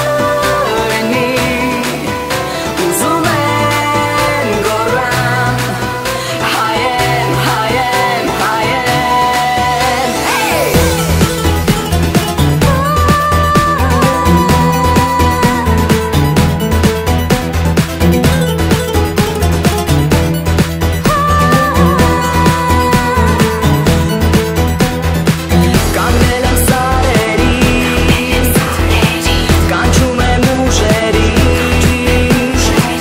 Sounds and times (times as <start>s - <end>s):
Pop music: 0.0s - 33.0s.